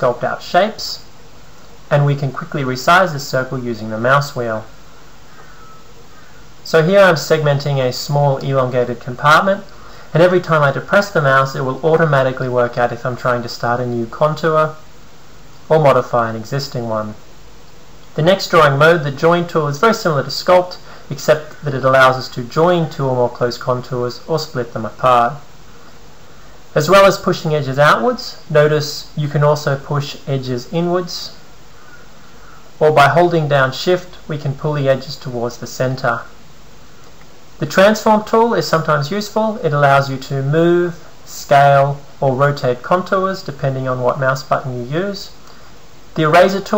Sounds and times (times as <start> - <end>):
Speech: 0.0 - 1.1, 1.9 - 4.8, 6.6 - 14.9, 15.7 - 17.3, 18.1 - 25.5, 26.7 - 31.4, 32.8 - 36.4, 37.6 - 45.4, 46.1 - 46.7.